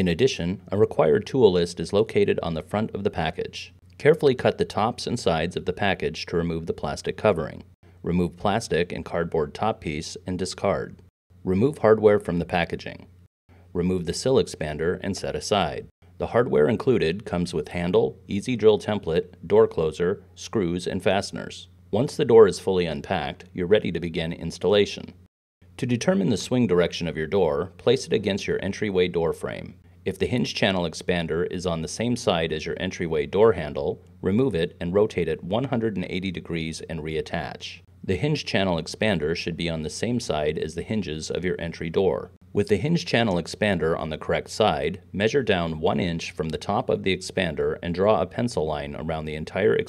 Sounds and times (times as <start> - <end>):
Speech: 0.0 - 49.8.